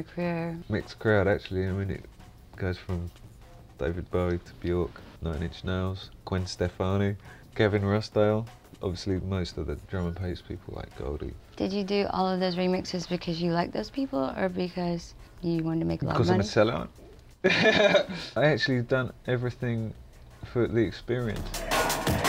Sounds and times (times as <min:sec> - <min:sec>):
Music: 0:00.0 - 0:22.2.